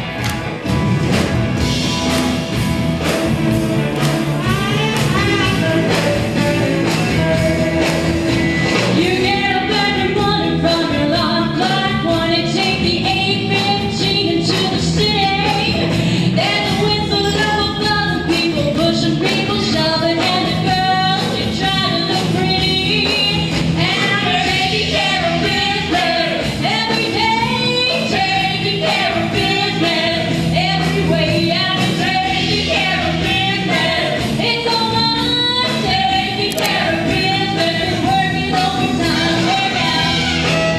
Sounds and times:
Music: 0.0 - 40.7
Female singing: 4.4 - 8.0, 9.0 - 40.4.

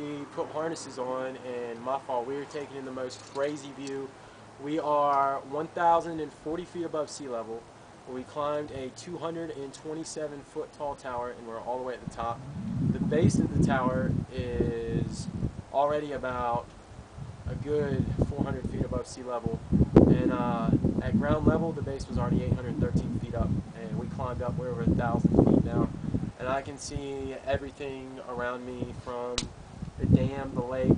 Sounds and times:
Speech: 0.0 - 12.4, 13.0 - 16.7, 17.5 - 30.9.

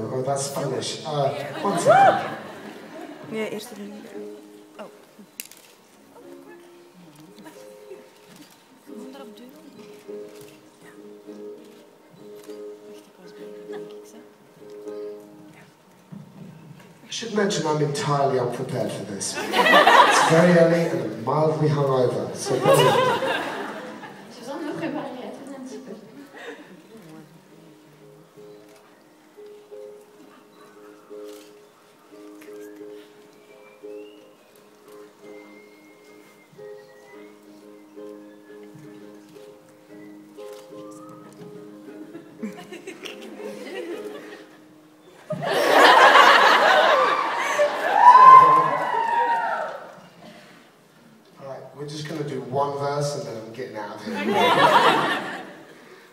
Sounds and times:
Music: 0.0 - 56.1.

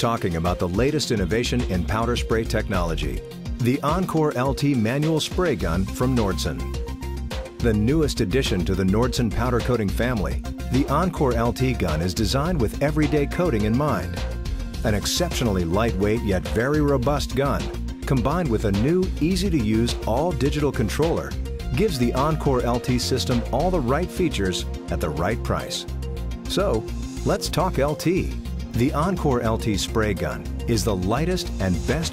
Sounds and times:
Speech: 0.0 - 6.6, 7.6 - 14.2, 14.8 - 25.8, 26.5 - 32.1
Music: 0.0 - 32.1.

